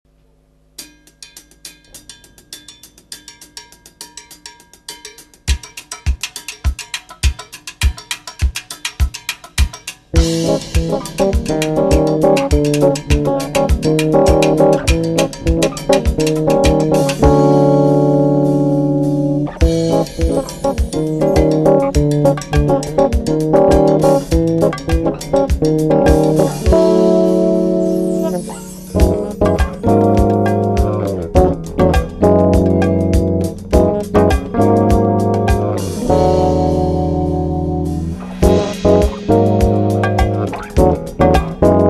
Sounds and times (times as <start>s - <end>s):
Percussion: 0.7s - 41.8s.